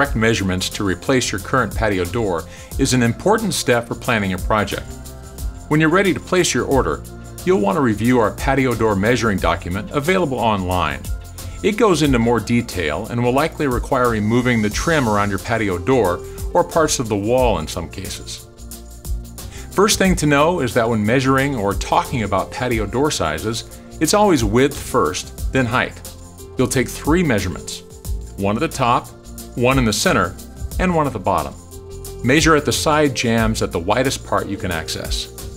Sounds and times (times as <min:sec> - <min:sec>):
Speech: 0:00.0 - 0:04.9, 0:05.7 - 0:18.4, 0:19.8 - 0:26.0, 0:26.6 - 0:27.8, 0:28.4 - 0:31.6, 0:32.2 - 0:35.3
Music: 0:00.0 - 0:35.5.